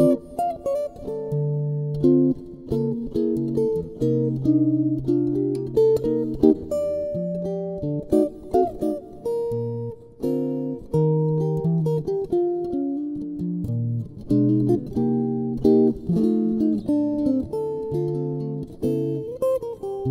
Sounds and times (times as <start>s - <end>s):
Electric guitar: 0.0s - 20.1s.